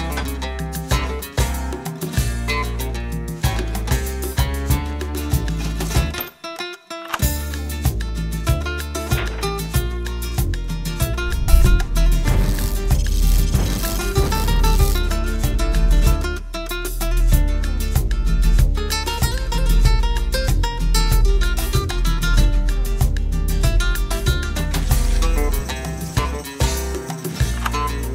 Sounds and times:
Salsa music: 10.6 - 28.1.

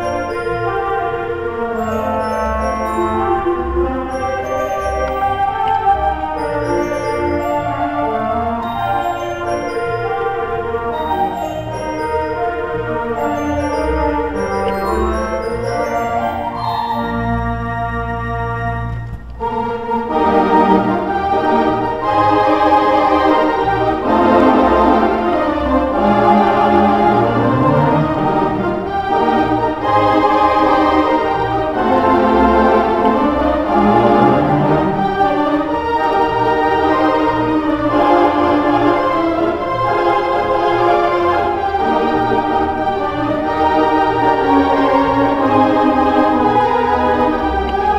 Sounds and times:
Hammond organ: 0.0 - 47.9.

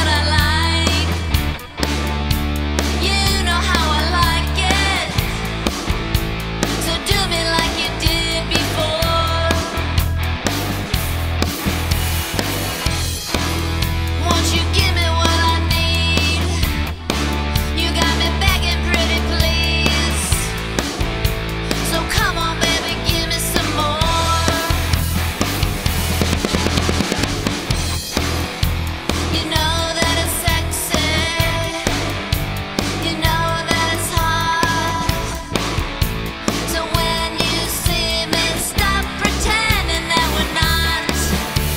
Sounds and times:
Pop music: 0.0 - 2.0, 2.7 - 5.8, 6.6 - 10.8, 13.3 - 25.7, 29.1 - 41.7.

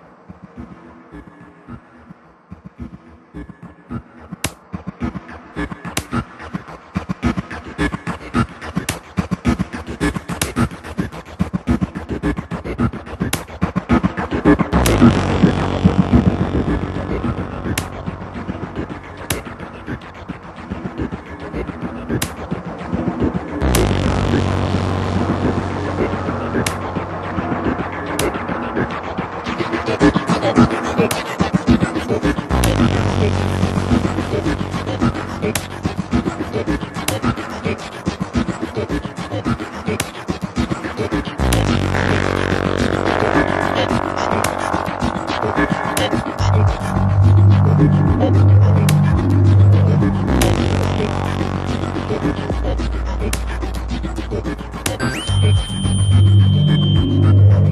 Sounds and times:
Electronica: 0.0 - 57.7.

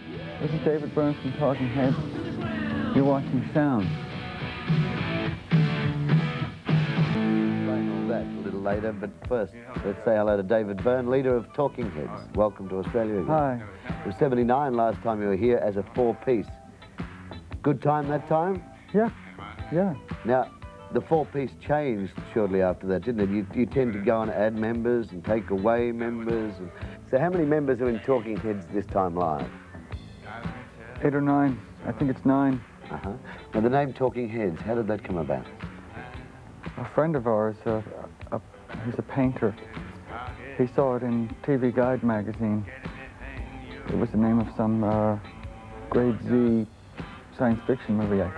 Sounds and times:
Music: 0.0 - 48.3
Speech: 0.4 - 2.2, 2.9 - 3.9, 7.6 - 16.6, 17.6 - 29.5, 31.0 - 35.5, 36.8 - 39.6, 40.6 - 42.7, 43.9 - 45.3, 45.9 - 46.7, 47.4 - 48.3.

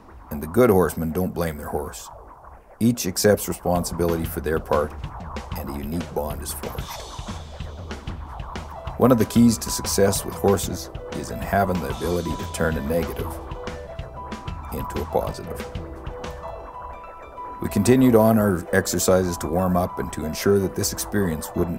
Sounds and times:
Speech: 0.3 - 2.2, 2.8 - 5.0, 5.6 - 7.1, 9.0 - 13.4, 14.7 - 15.7, 17.6 - 21.7
Music: 3.8 - 21.7.

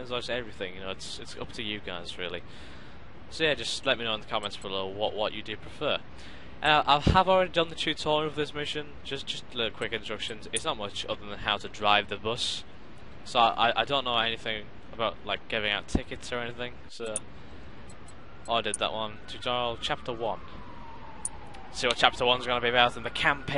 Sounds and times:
Speech: 0.0 - 2.4, 3.3 - 6.0, 6.6 - 12.6, 13.3 - 17.2, 18.5 - 20.5, 21.7 - 23.5.

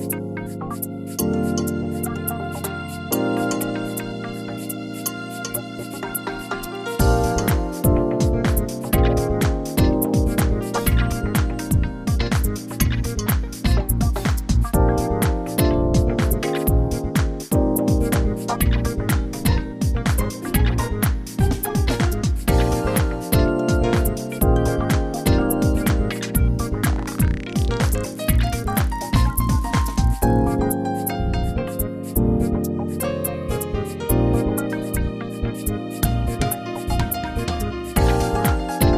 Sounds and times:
Music: 0.0 - 38.9.

